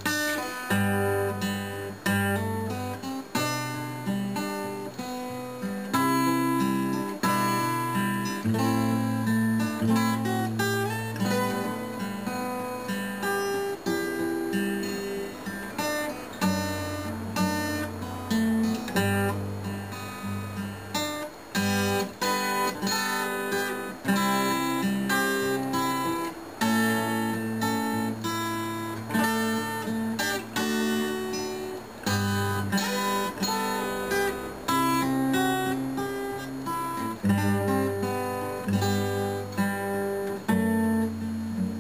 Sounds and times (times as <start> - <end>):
Acoustic guitar: 0.0 - 41.8
Strum: 0.0 - 41.8.